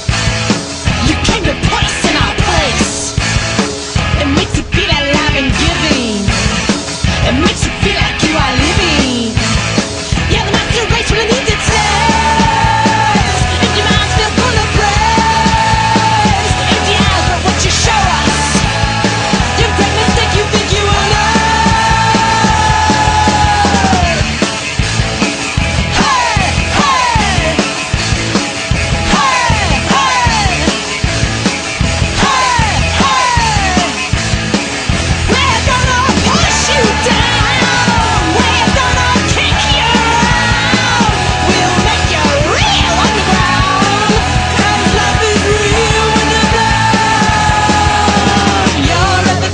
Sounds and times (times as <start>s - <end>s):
Music: 0.0s - 49.5s.